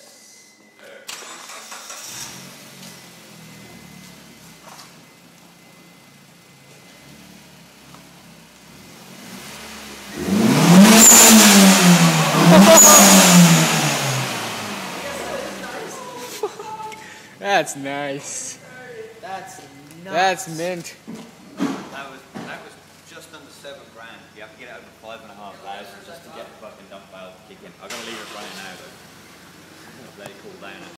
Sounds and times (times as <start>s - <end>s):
Vehicle: 1.1s - 30.9s
Speech: 21.9s - 29.0s, 30.0s - 30.9s.